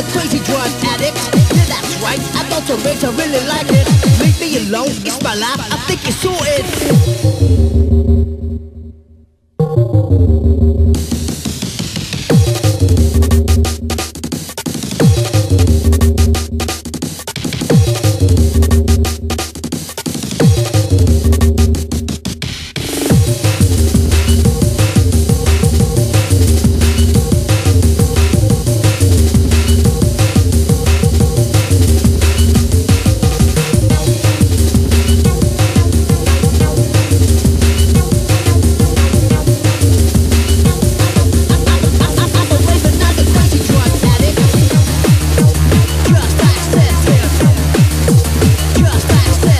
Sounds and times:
Drum and bass: 0:00.0 - 0:08.8, 0:09.6 - 0:49.6.

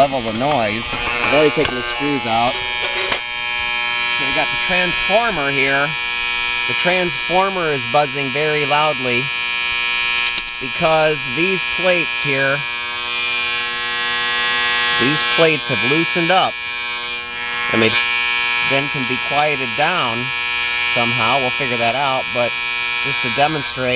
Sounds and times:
Hum: 0:00.0 - 0:23.9
Mains hum: 0:00.0 - 0:23.9.

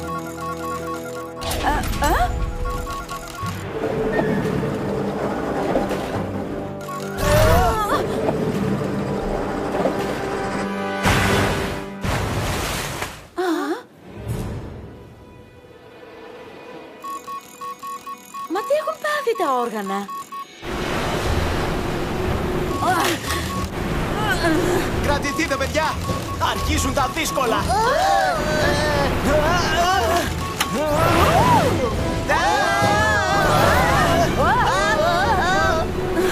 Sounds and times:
Music: 0:00.0 - 0:12.1, 0:14.0 - 0:20.4, 0:23.5 - 0:36.3.

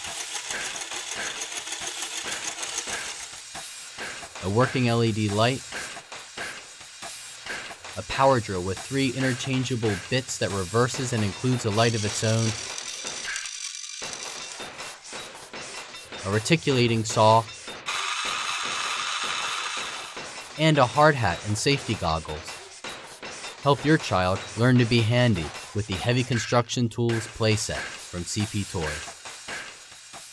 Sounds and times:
Drill: 0:00.0 - 0:03.3, 0:11.6 - 0:14.7, 0:17.9 - 0:20.3.

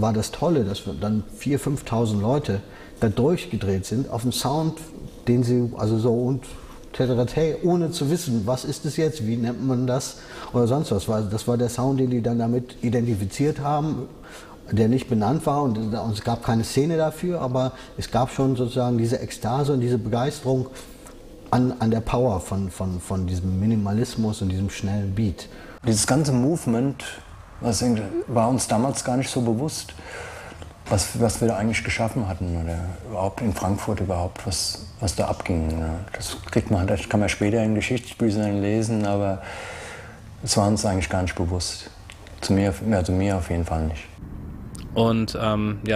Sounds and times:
Speech: 0:00.0 - 0:20.8, 0:21.5 - 0:30.0, 0:30.9 - 0:39.4, 0:40.4 - 0:44.2, 0:44.8 - 0:45.9.

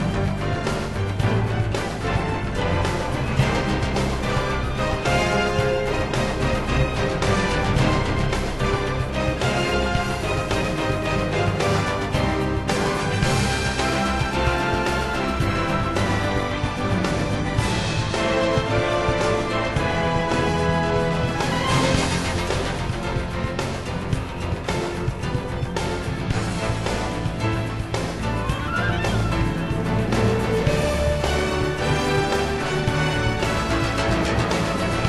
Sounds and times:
Music: 0:00.0 - 0:35.0.

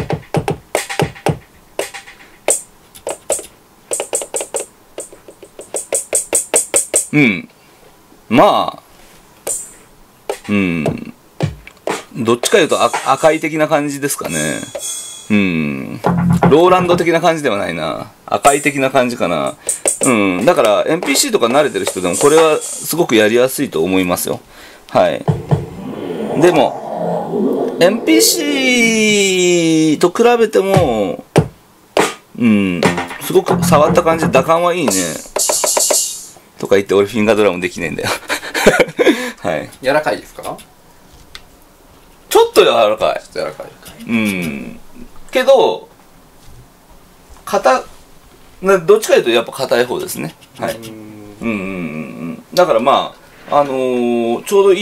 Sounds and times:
Speech: 0:07.1 - 0:07.6, 0:08.3 - 0:08.9, 0:10.5 - 0:11.2, 0:12.2 - 0:14.7, 0:15.3 - 0:25.3, 0:27.8 - 0:31.3, 0:32.4 - 0:35.4, 0:36.6 - 0:38.2, 0:39.4 - 0:40.7, 0:42.3 - 0:45.9, 0:47.4 - 0:47.9, 0:48.6 - 0:54.8.

